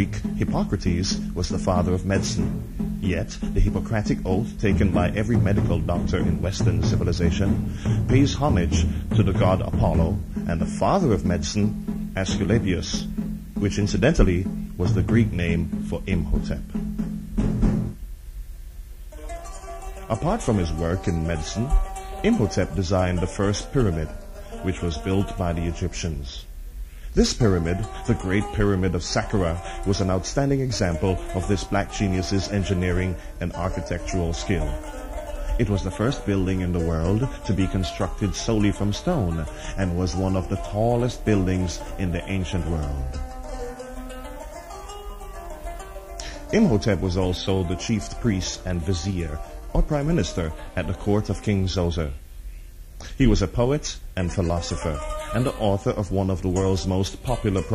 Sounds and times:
Music: 0.0s - 57.7s.

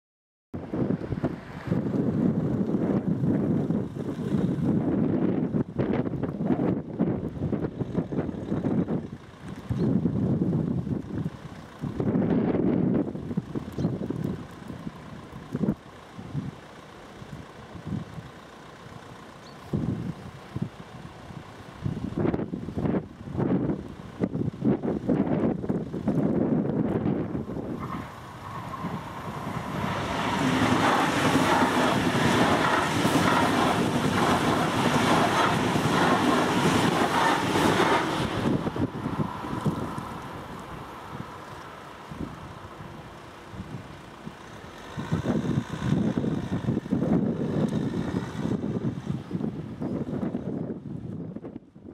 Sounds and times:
Wind noise (microphone): 0.6s - 16.6s, 17.8s - 18.3s, 19.7s - 20.8s, 21.8s - 40.3s, 42.1s - 44.4s, 45.0s - 51.9s.

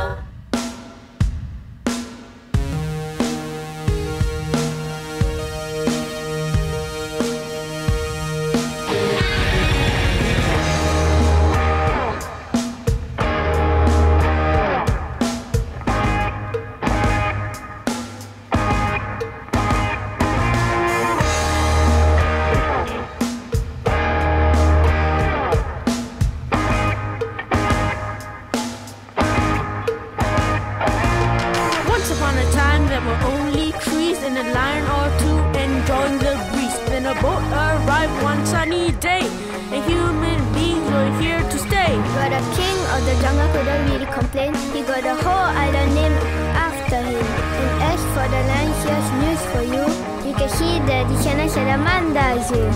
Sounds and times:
Rhythm and blues: 0.0s - 52.7s.

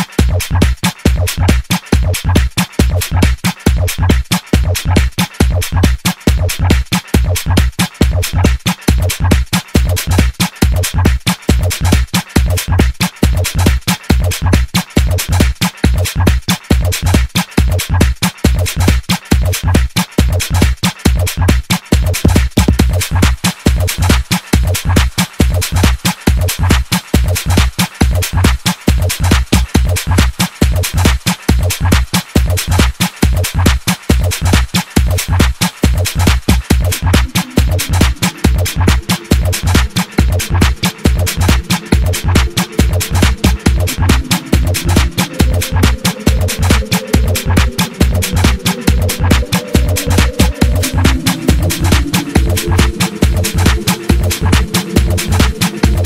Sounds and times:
Techno: 0.0s - 56.0s
Trance music: 0.0s - 56.0s.

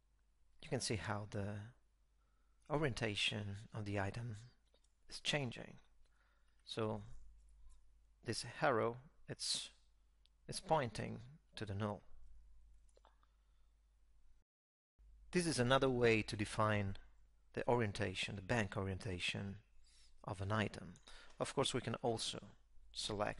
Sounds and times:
Inside, small room: 0.0s - 23.3s
Speech: 0.6s - 1.8s, 2.7s - 5.8s, 6.7s - 7.2s, 8.2s - 9.8s, 10.5s - 12.1s, 15.4s - 19.6s, 20.2s - 23.3s.

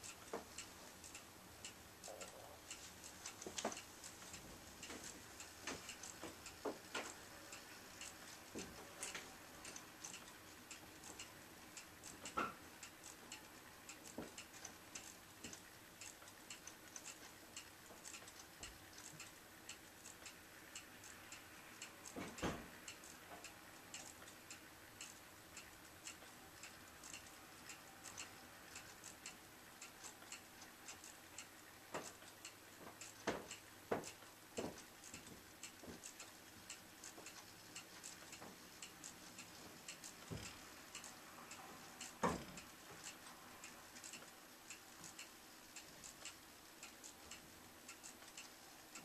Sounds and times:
Tick: 0.0s - 7.2s, 21.3s - 41.1s, 42.0s - 43.4s, 44.0s - 49.0s
Tick-tock: 0.0s - 49.0s.

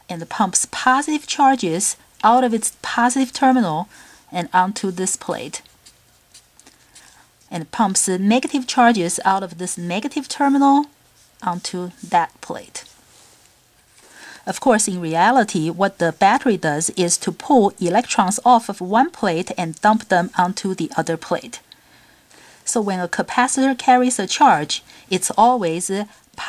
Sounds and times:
Speech: 0.1s - 5.7s, 7.5s - 12.9s, 14.5s - 21.6s, 22.7s - 26.4s.

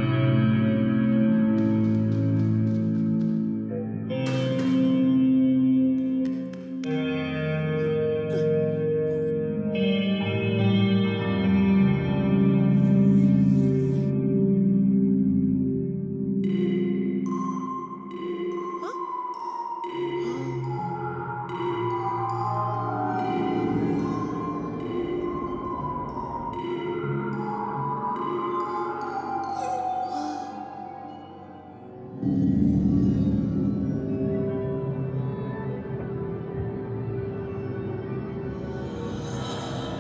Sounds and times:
Music: 0.0s - 40.0s.

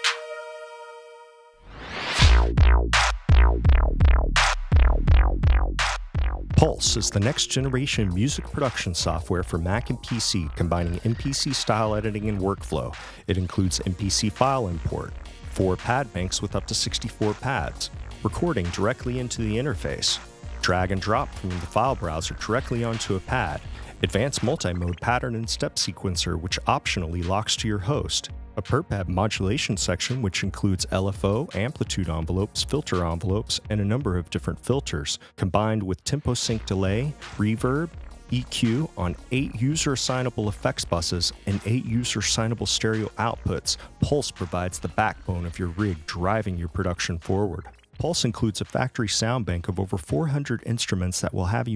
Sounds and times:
Music: 0.0s - 51.7s
Speech: 6.6s - 51.7s.

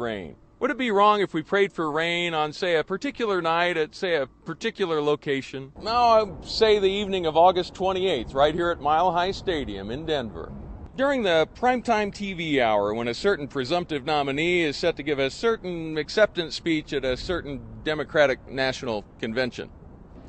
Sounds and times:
Male speech, man speaking: 0.0s - 19.7s.

